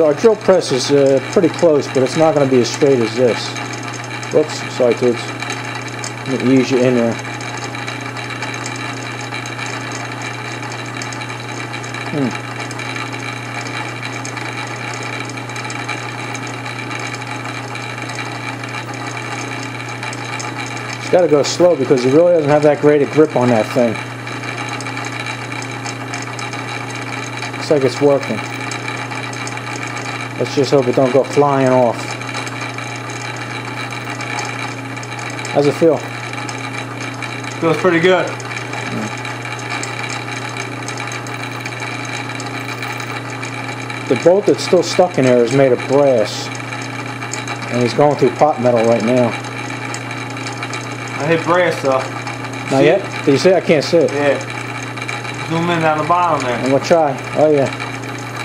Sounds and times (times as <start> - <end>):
Power tool: 0.0 - 58.4.